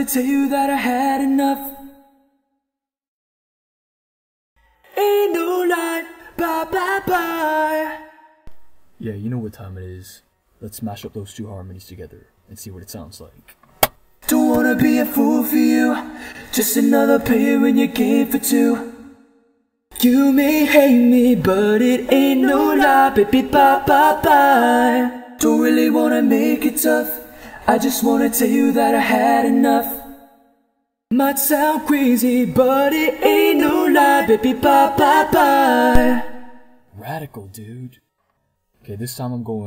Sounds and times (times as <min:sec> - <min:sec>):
Singing: 0:00.0 - 0:02.0, 0:04.9 - 0:08.4, 0:14.2 - 0:19.2, 0:19.9 - 0:30.2, 0:31.1 - 0:36.7
Speech: 0:09.0 - 0:13.5, 0:36.9 - 0:38.0, 0:38.8 - 0:39.6.